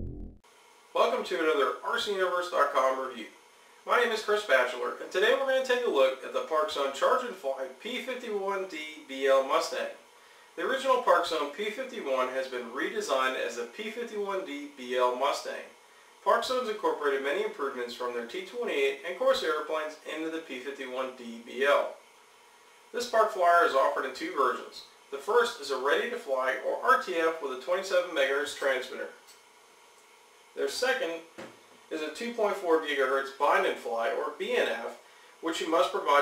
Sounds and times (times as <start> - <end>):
Speech: 1.0 - 10.0, 10.6 - 22.0, 22.9 - 29.2, 30.6 - 36.2.